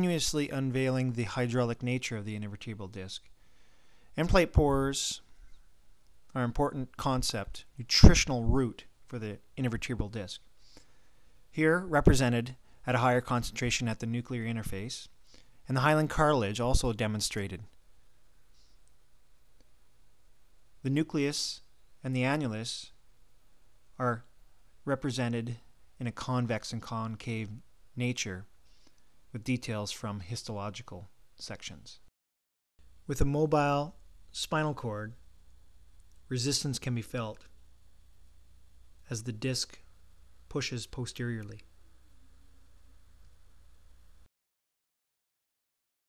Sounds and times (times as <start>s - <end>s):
Speech: 0.0s - 3.3s, 4.2s - 5.2s, 6.3s - 10.4s, 11.6s - 15.1s, 15.7s - 17.7s, 20.8s - 23.0s, 24.0s - 24.3s, 24.9s - 28.5s, 29.4s - 32.1s, 33.1s - 35.2s, 36.3s - 37.5s, 39.1s - 39.9s, 40.5s - 41.7s.